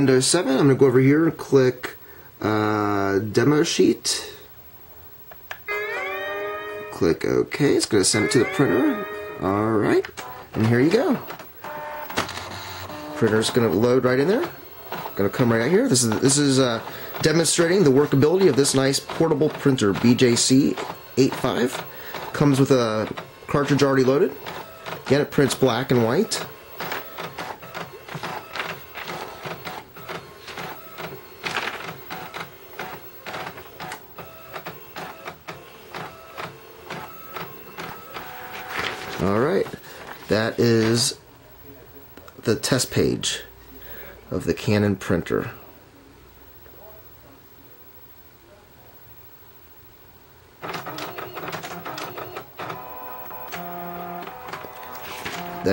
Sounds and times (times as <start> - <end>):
Speech: 0.0 - 4.4, 7.0 - 11.3, 13.2 - 24.4, 25.1 - 26.5, 39.2 - 43.6, 44.2 - 49.1
Printer: 5.7 - 41.2, 50.6 - 55.7.